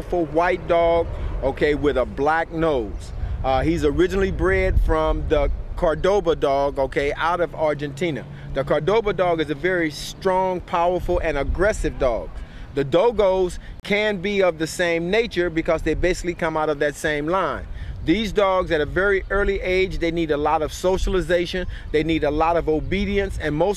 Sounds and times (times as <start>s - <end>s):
Speech: 0.0s - 23.7s.